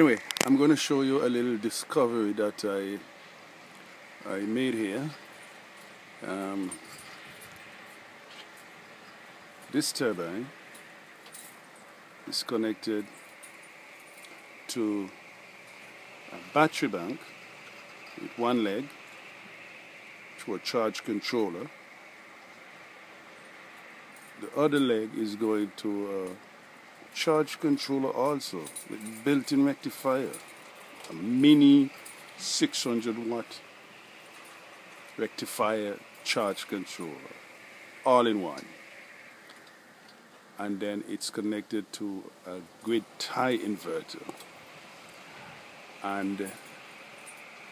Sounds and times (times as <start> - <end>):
Speech: 0.0 - 3.1, 4.2 - 5.2, 6.2 - 6.8, 9.7 - 10.6, 12.3 - 13.1, 14.7 - 15.2, 16.3 - 17.3, 18.2 - 18.9, 20.4 - 21.7, 24.4 - 26.4, 27.2 - 30.4, 31.1 - 33.6, 35.2 - 37.4, 38.1 - 38.8, 40.6 - 44.3, 46.0 - 46.6.